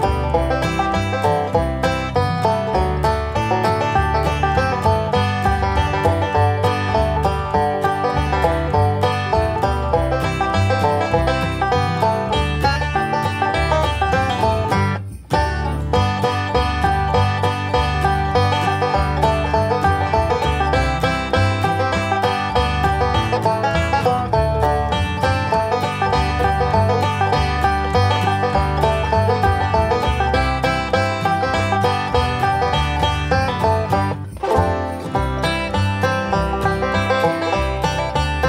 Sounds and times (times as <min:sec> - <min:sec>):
Music: 0:00.0 - 0:38.4.